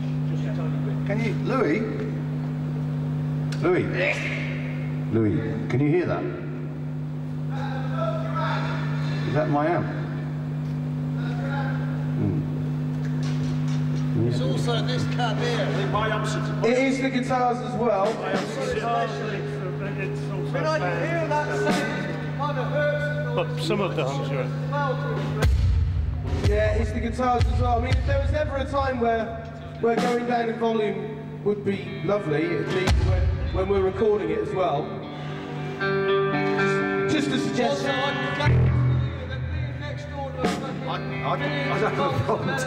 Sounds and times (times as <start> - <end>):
Speech: 0.3 - 2.0, 5.1 - 6.4, 11.2 - 12.5, 14.1 - 25.4, 26.4 - 34.9, 37.1 - 42.6.